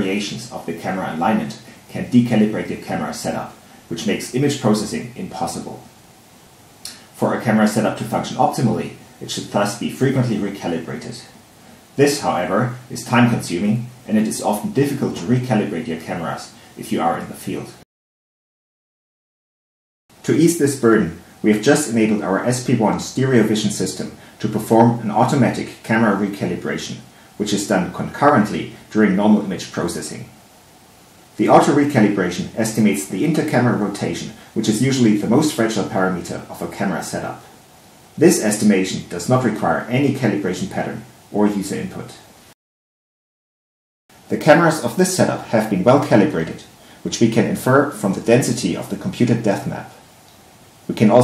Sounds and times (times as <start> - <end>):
Speech: 0.0 - 6.0, 6.9 - 11.4, 12.0 - 17.9, 20.2 - 30.4, 31.4 - 37.6, 38.2 - 42.3, 44.3 - 50.0, 50.9 - 51.2.